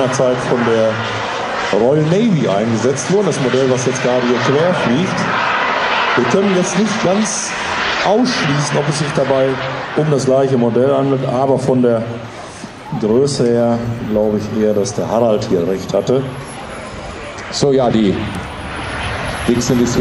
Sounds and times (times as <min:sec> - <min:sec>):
Speech: 0:00.0 - 0:01.0, 0:01.7 - 0:05.3, 0:06.2 - 0:12.2, 0:12.9 - 0:16.4, 0:17.4 - 0:18.4, 0:19.5 - 0:20.0
Aircraft: 0:00.0 - 0:20.0.